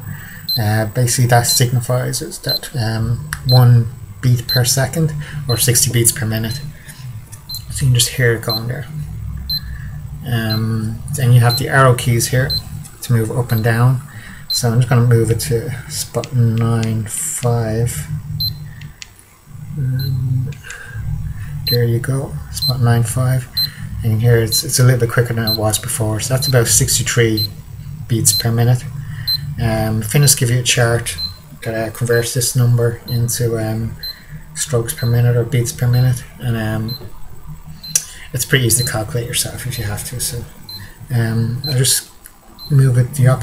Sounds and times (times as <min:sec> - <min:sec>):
Speech: 0:00.6 - 0:06.7, 0:07.7 - 0:08.9, 0:10.2 - 0:18.1, 0:19.8 - 0:20.6, 0:21.7 - 0:29.0, 0:29.6 - 0:34.0, 0:34.6 - 0:37.1, 0:38.3 - 0:40.5, 0:41.1 - 0:42.1, 0:42.7 - 0:43.4.